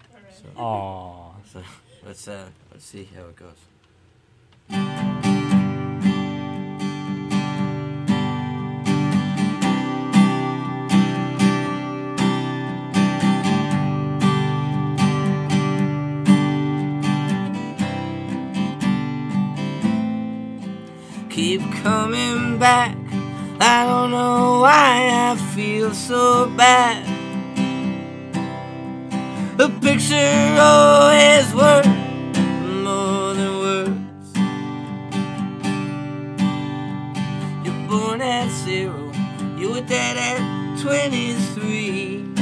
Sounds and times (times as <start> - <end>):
Music: 4.7 - 42.4.